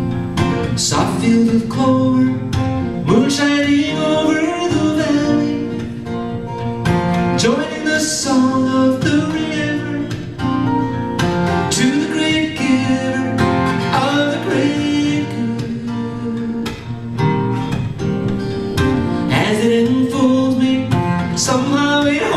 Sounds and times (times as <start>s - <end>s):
Music: 0.0s - 22.3s.